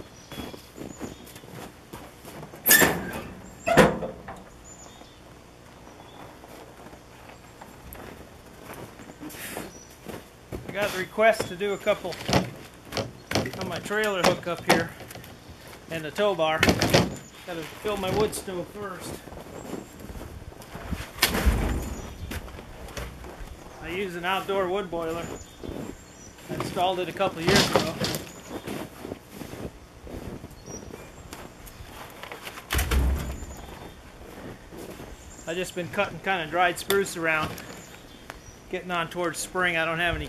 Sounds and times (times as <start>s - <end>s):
Outside, rural or natural: 0.0s - 40.2s
Speech: 10.7s - 12.4s, 13.4s - 15.0s, 15.9s - 16.8s, 17.5s - 19.3s, 23.8s - 25.4s, 26.5s - 28.3s, 35.5s - 37.6s, 38.7s - 40.2s.